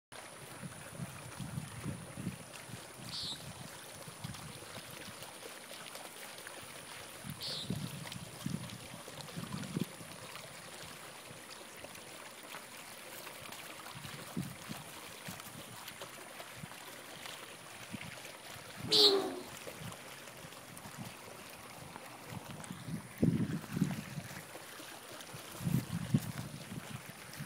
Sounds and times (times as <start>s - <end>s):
Trickle, dribble: 0.1s - 27.4s.